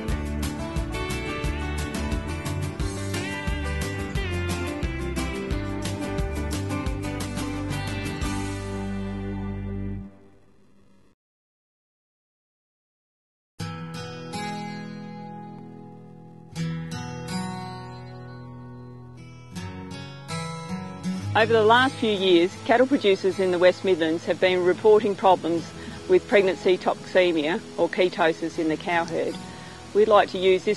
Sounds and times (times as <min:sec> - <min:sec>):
Music: 0:00.0 - 0:11.2, 0:13.6 - 0:30.7
Speech: 0:21.4 - 0:30.7.